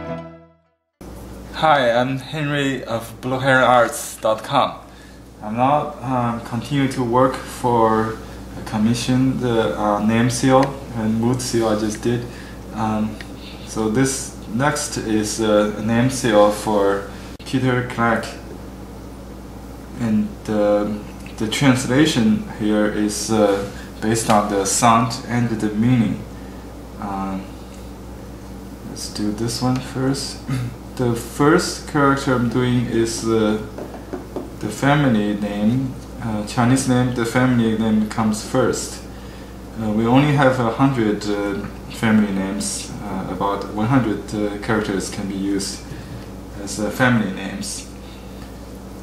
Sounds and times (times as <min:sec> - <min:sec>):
Speech: 0:01.5 - 0:18.5, 0:20.0 - 0:26.3, 0:27.0 - 0:27.6, 0:28.8 - 0:33.8, 0:34.6 - 0:39.1, 0:39.8 - 0:45.9, 0:46.6 - 0:48.0.